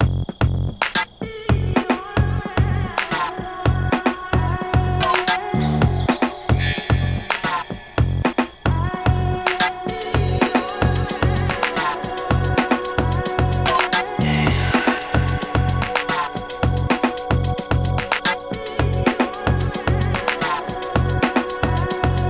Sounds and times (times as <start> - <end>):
Music: 0.0 - 22.2.